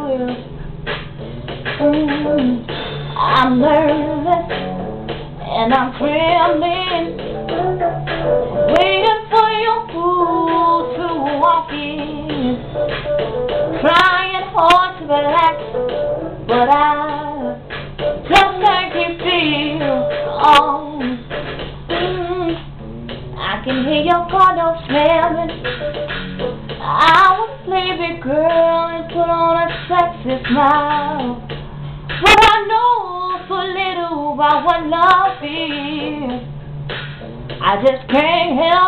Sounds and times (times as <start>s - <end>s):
Female singing: 0.0s - 0.4s, 3.2s - 4.5s, 5.4s - 7.9s, 8.7s - 12.6s, 13.8s - 15.6s, 18.3s - 21.2s, 23.4s - 25.5s, 26.8s - 31.4s, 32.2s - 36.4s, 37.6s - 38.8s
Music: 0.0s - 38.8s.